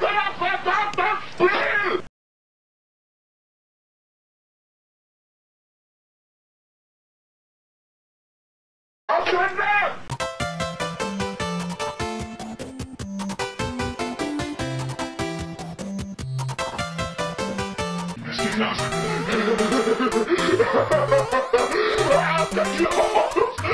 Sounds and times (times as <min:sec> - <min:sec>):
Speech: 0:09.1 - 0:10.0, 0:18.2 - 0:18.9, 0:22.1 - 0:23.0
Music: 0:10.1 - 0:23.7.